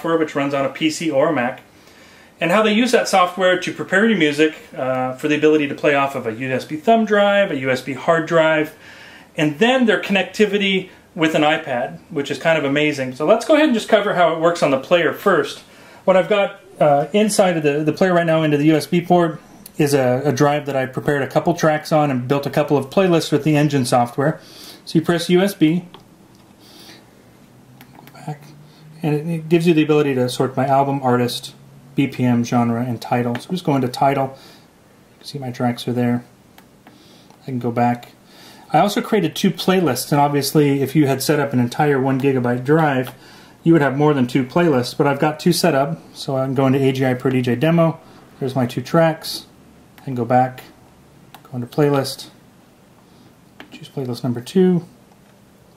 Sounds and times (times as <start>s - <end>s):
Speech: 0.0s - 1.7s, 2.4s - 8.8s, 9.4s - 26.0s, 28.0s - 34.4s, 35.2s - 36.3s, 37.4s - 50.8s, 51.4s - 52.4s, 53.6s - 55.0s.